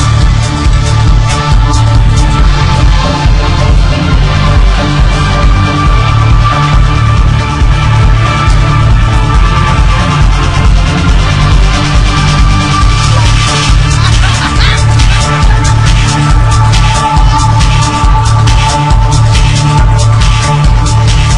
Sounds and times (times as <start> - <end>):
Music: 0.0 - 21.3.